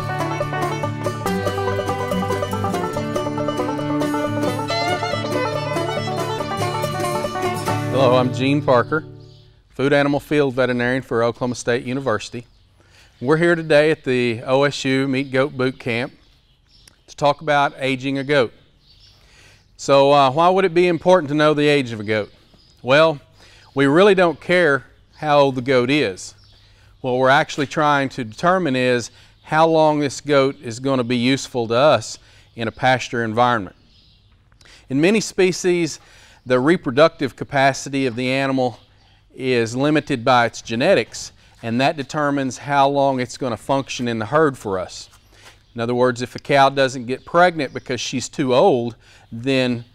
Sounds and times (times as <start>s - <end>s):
Speech: 7.9s - 9.1s, 9.8s - 12.5s, 13.2s - 16.2s, 17.1s - 18.6s, 19.8s - 23.2s, 23.8s - 26.4s, 27.0s - 33.8s, 34.9s - 38.8s, 39.4s - 45.1s, 45.8s - 49.9s.